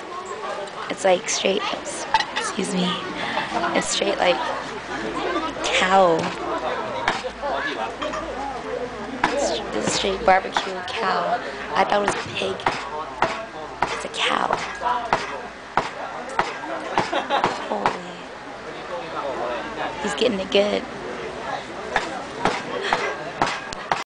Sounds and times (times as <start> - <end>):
Speech: 0.0 - 23.4.